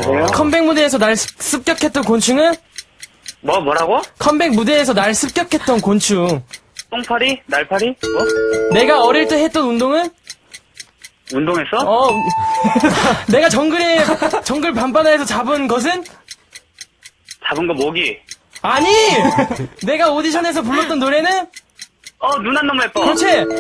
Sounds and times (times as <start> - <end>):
Speech: 0.0 - 2.6, 3.4 - 8.0, 8.7 - 10.2, 11.3 - 12.2, 13.3 - 16.1, 17.4 - 21.5, 22.2 - 23.6
Music: 8.1 - 9.4.